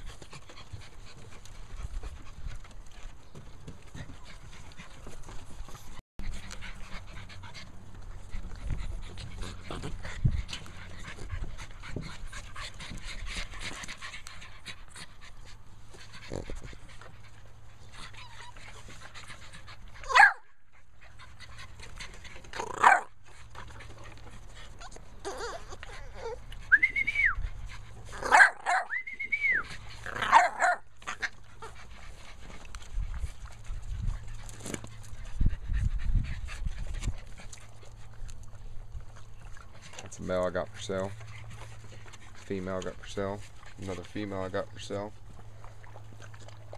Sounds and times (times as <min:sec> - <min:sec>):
Dog: 0:00.0 - 0:46.7.